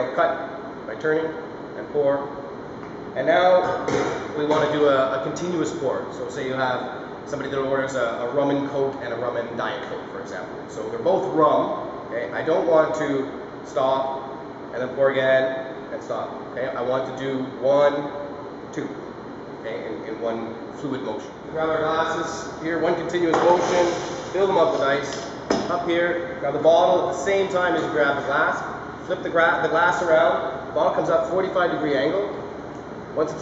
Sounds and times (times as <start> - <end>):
Speech: 0.0 - 2.4, 3.2 - 19.0, 19.6 - 32.4, 33.2 - 33.4.